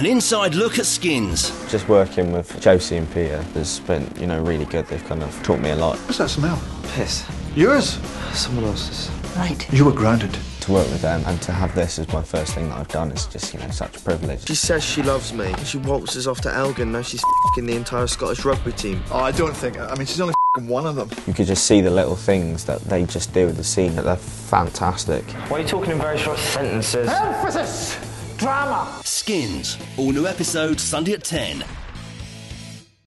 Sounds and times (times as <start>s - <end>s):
Music: 0.0s - 33.0s
Speech: 9.9s - 31.7s.